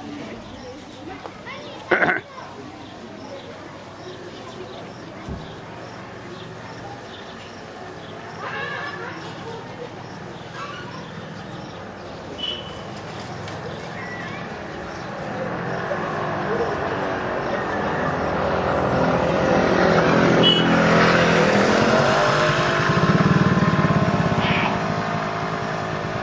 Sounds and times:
Speech: 0:00.0 - 0:11.9, 0:24.4 - 0:24.8
Race car, auto racing: 0:16.4 - 0:24.8.

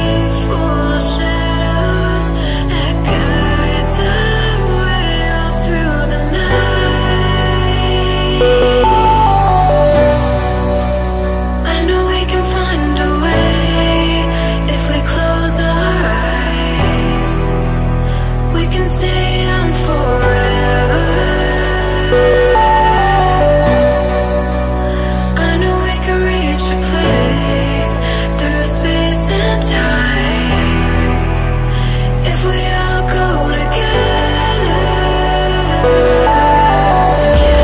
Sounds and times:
Electronic music: 0:03.0 - 0:14.2, 0:18.7 - 0:27.8, 0:32.4 - 0:37.6.

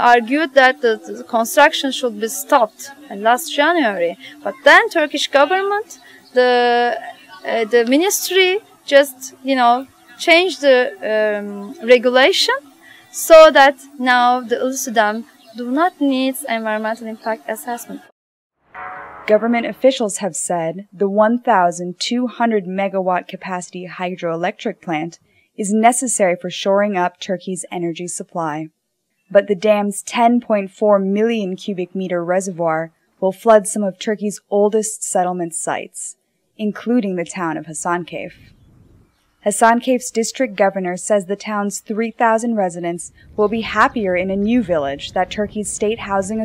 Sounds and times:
Speech: 0:00.0 - 0:18.2, 0:19.3 - 0:28.7, 0:29.3 - 0:38.4, 0:39.5 - 0:46.4.

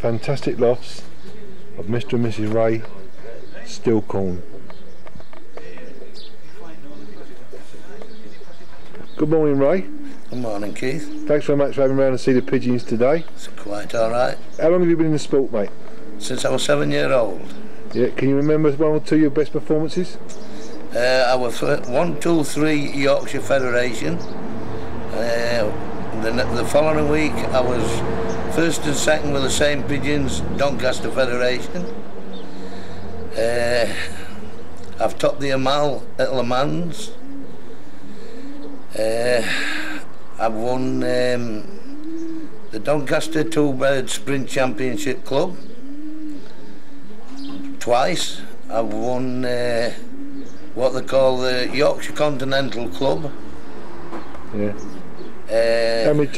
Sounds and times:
Speech: 0:00.0 - 0:01.1, 0:01.8 - 0:04.5, 0:09.2 - 0:17.4, 0:18.0 - 0:20.2, 0:21.0 - 0:24.2, 0:25.2 - 0:31.9, 0:33.4 - 0:34.1, 0:35.0 - 0:37.2, 0:40.4 - 0:41.7, 0:42.8 - 0:45.6, 0:47.8 - 0:50.0, 0:50.8 - 0:53.3, 0:54.6 - 0:54.9, 0:55.5 - 0:56.3.

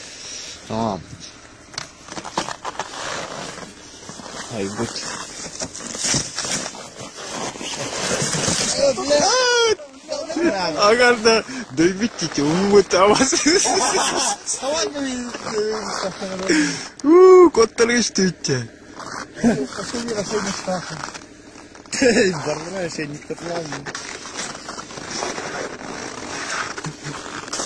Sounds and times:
Speech: 0:04.5 - 0:05.1, 0:08.7 - 0:13.4, 0:14.5 - 0:18.7, 0:19.4 - 0:21.1, 0:22.0 - 0:23.9.

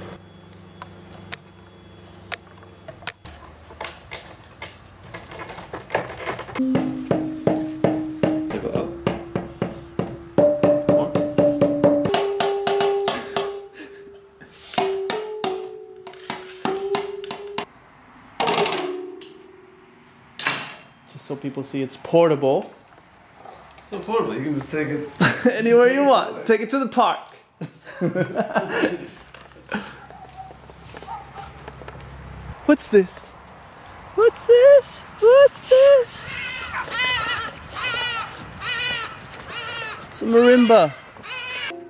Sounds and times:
Marimba, xylophone: 0:06.6 - 0:17.7.

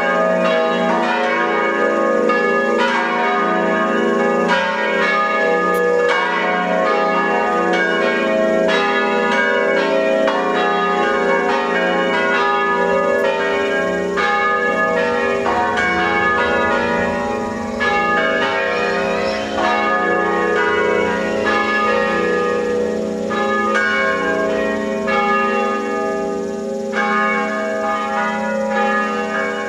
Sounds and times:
Change ringing (campanology): 0:00.0 - 0:29.6.

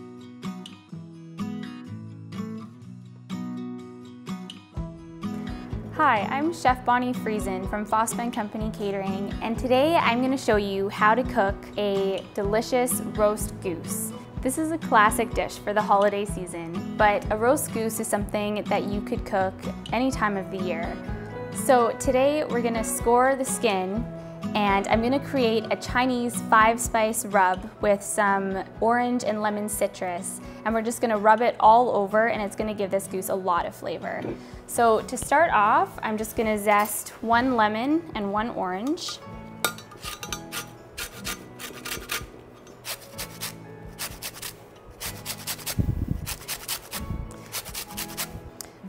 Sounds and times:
Music: 0:00.0 - 0:48.8.

